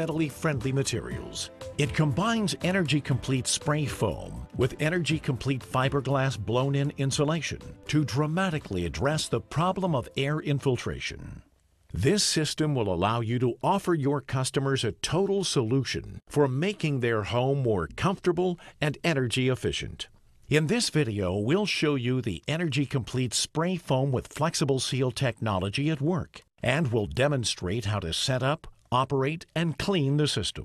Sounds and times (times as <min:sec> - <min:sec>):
Music: 0:00.0 - 0:11.0
Speech: 0:00.0 - 0:30.6.